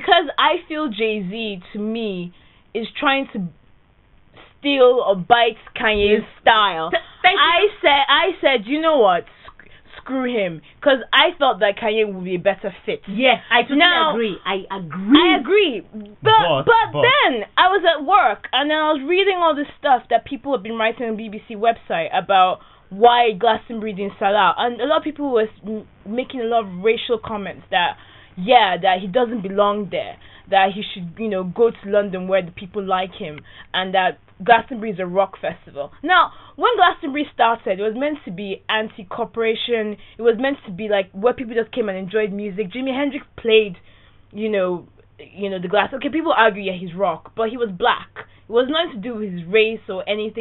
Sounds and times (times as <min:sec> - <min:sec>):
Speech: 0:10.0 - 0:43.8, 0:44.4 - 0:50.4.